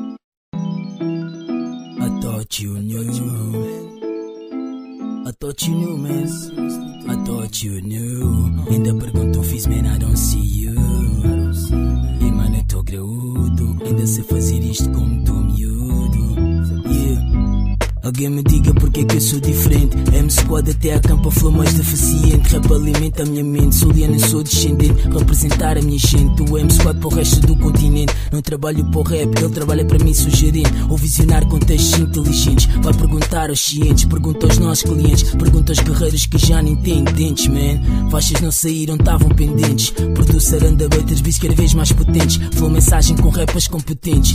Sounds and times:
Music: 0.0s - 44.3s.

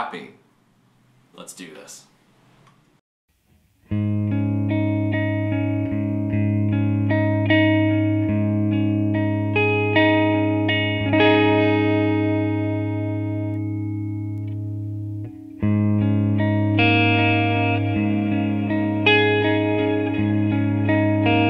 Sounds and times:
Speech: 0.0s - 0.4s, 1.4s - 2.2s
Music: 3.5s - 21.5s.

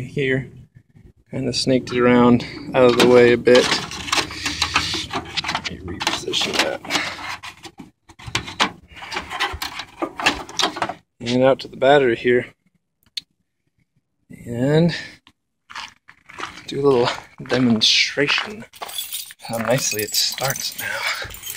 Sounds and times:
Speech: 0.0s - 0.6s, 1.3s - 3.9s, 5.6s - 6.9s, 11.2s - 12.6s, 14.3s - 15.2s, 16.7s - 18.7s, 19.4s - 20.9s.

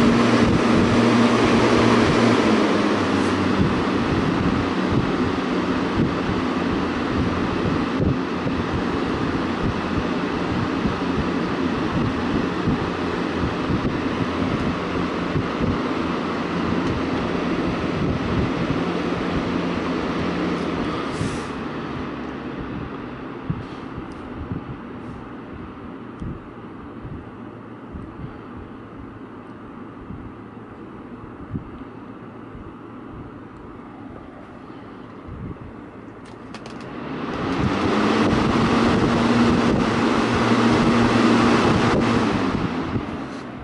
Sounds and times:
Mechanical fan: 0.0s - 43.6s.

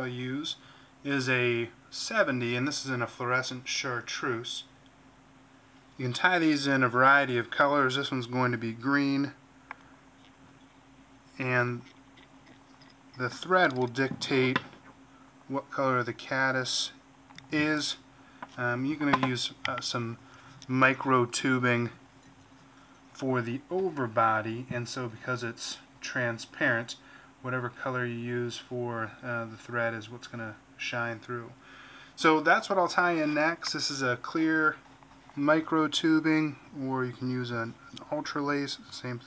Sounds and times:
Speech: 0.0s - 4.7s, 6.0s - 9.4s, 11.4s - 11.8s, 13.2s - 14.7s, 15.5s - 18.0s, 18.6s - 22.0s, 23.2s - 31.6s, 32.2s - 34.8s, 35.4s - 39.2s.

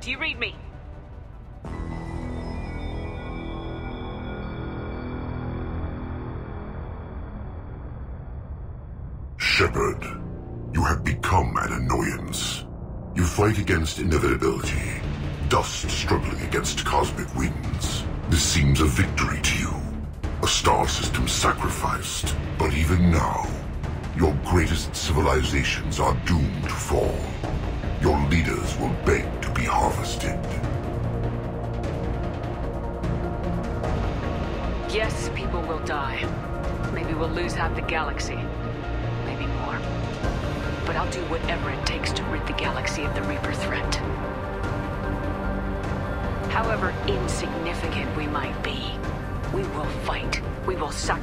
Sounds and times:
Music: 0.0s - 51.2s.

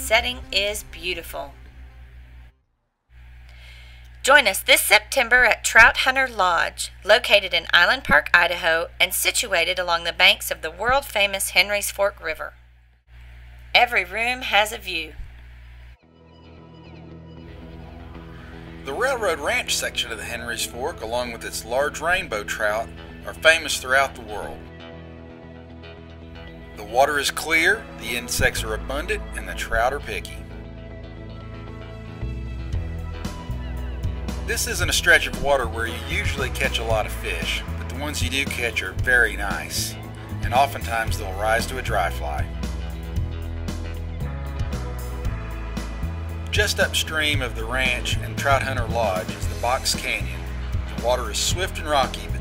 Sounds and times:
Speech: 0.0s - 1.6s, 4.2s - 12.6s, 13.8s - 15.2s, 18.9s - 24.6s, 26.8s - 30.4s, 34.5s - 42.5s, 46.5s - 50.4s, 51.0s - 52.4s
Music: 0.0s - 2.6s, 16.0s - 52.4s.

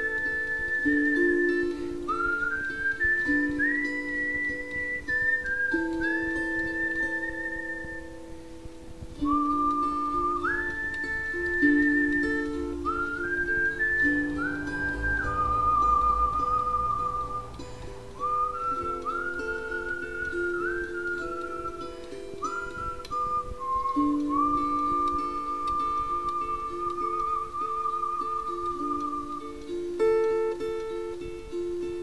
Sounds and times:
Whistling: 0.0s - 8.3s, 9.2s - 31.3s
Harp: 0.0s - 32.0s.

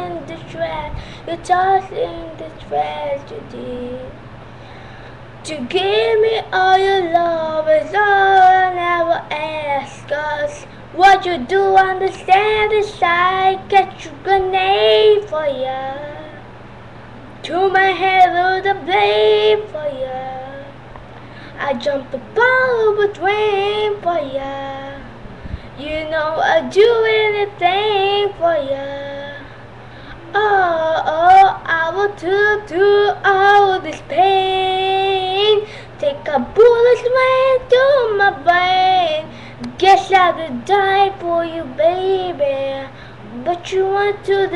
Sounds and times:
Child singing: 0.0s - 4.2s, 5.4s - 16.4s, 17.4s - 20.8s, 21.6s - 25.1s, 25.8s - 29.4s, 30.3s - 44.5s.

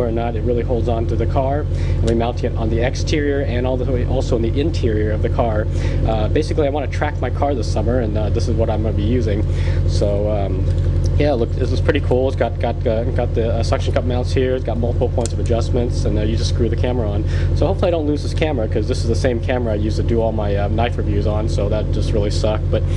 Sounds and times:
Speech: 0.0s - 22.9s.

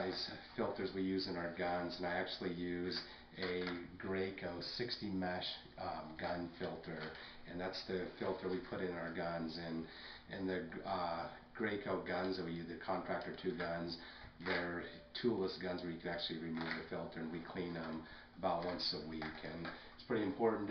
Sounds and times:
Speech: 0.0s - 20.7s.

